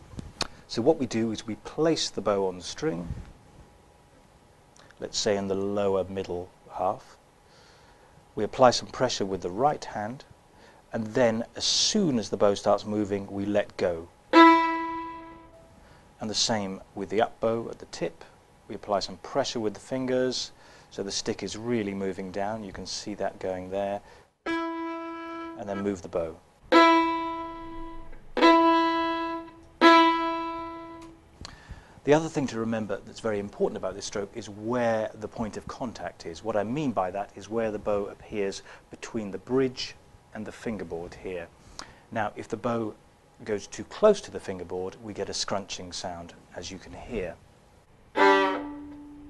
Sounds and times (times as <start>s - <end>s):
Speech: 0.7s - 3.2s, 5.0s - 7.2s, 8.4s - 10.3s, 10.9s - 14.1s, 16.2s - 24.0s, 25.6s - 26.4s, 32.0s - 47.4s.